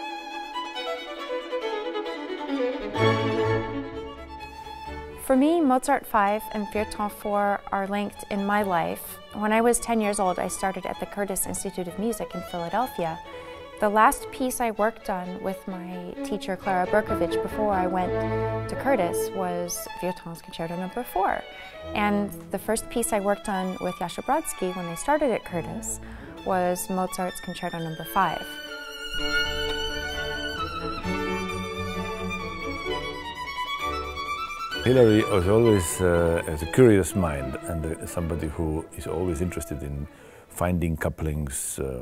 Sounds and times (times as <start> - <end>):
Violin, fiddle: 0.0 - 41.4
Speech: 5.3 - 13.2, 13.8 - 21.4, 22.0 - 28.5, 34.9 - 42.0.